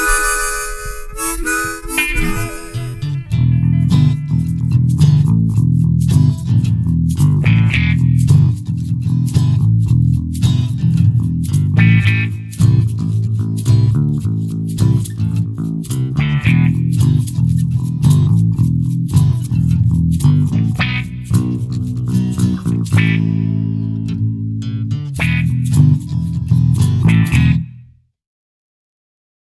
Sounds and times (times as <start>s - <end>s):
Acoustic guitar: 0.0s - 27.8s
Electric guitar: 0.0s - 27.8s
Strum: 0.0s - 27.8s.